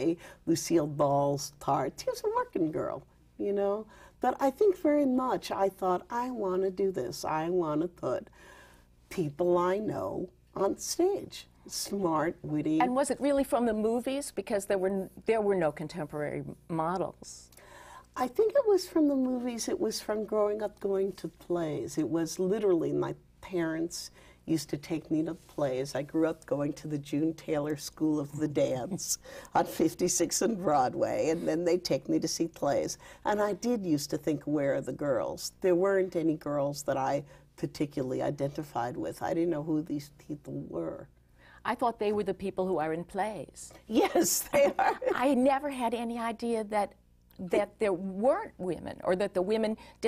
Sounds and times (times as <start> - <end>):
Female speech, woman speaking: 0.0 - 8.3, 9.1 - 17.5, 18.2 - 50.0.